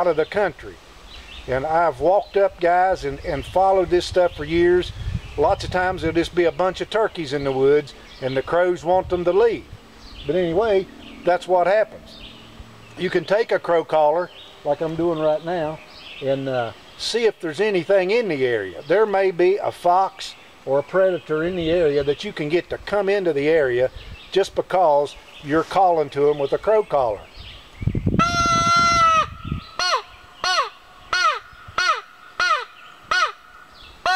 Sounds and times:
Speech: 0.0 - 0.8, 1.5 - 12.0, 13.0 - 27.3
Outside, rural or natural: 0.0 - 34.1.

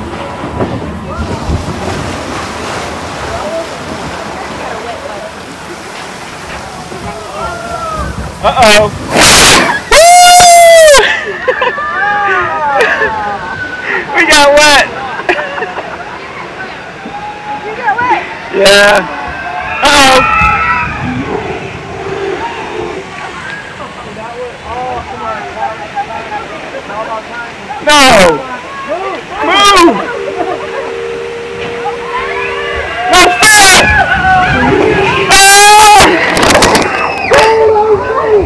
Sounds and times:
Hubbub, speech noise, speech babble: 3.1 - 38.4.

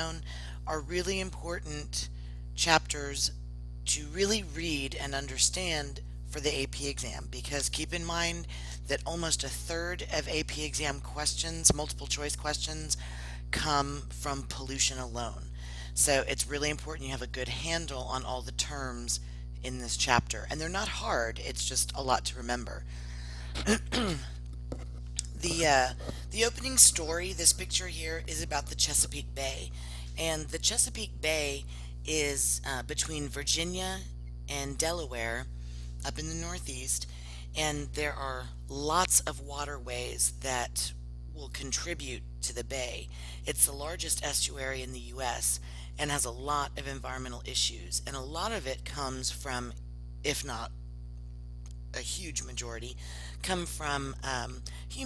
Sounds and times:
Speech: 0.0 - 22.8, 25.2 - 50.8, 51.9 - 55.0.

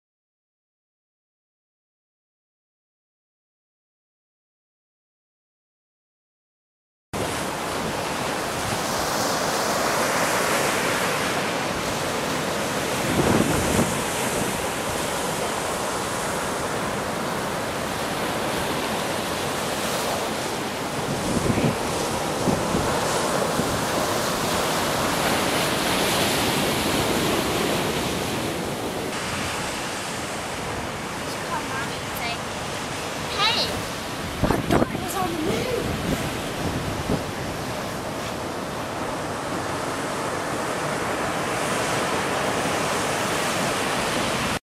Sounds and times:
Waves, surf: 7.2 - 44.6.

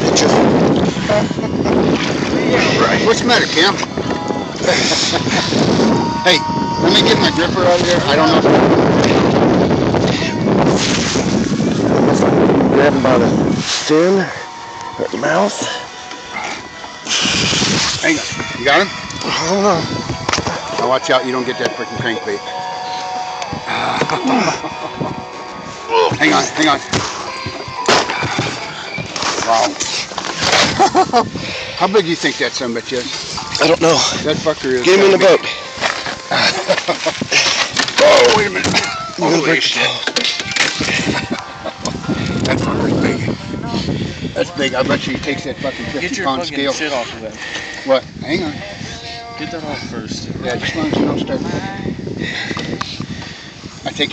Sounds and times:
Music: 0.0 - 47.8, 48.5 - 52.5
Outside, rural or natural: 0.0 - 54.1.

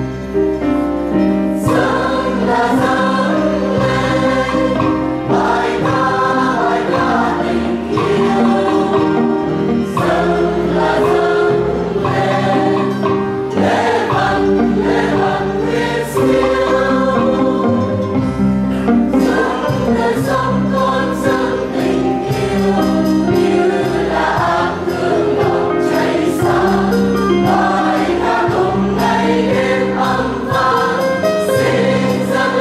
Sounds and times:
Gospel music: 0.0 - 32.6
Choir: 1.6 - 18.4, 19.1 - 32.6.

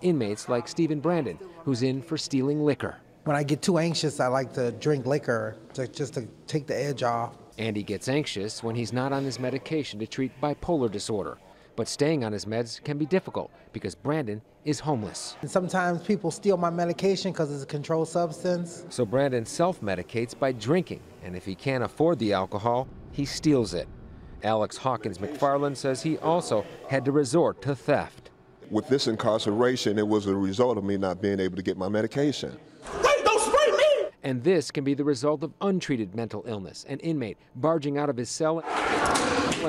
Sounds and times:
Speech: 0.0 - 38.6.

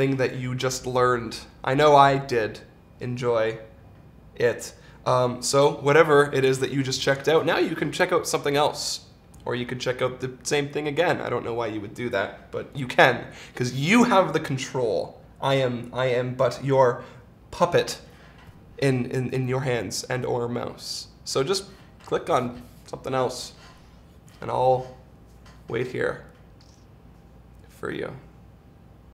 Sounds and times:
Speech: 0.0 - 3.7, 4.4 - 18.1, 18.8 - 23.6, 24.4 - 25.0, 25.7 - 26.3, 27.7 - 28.3.

